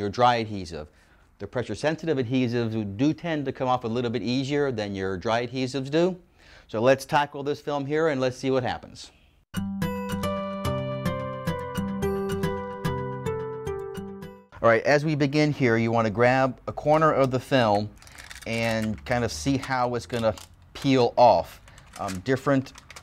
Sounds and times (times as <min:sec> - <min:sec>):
Speech: 0:00.0 - 0:09.2, 0:14.6 - 0:22.8
Music: 0:09.5 - 0:14.6.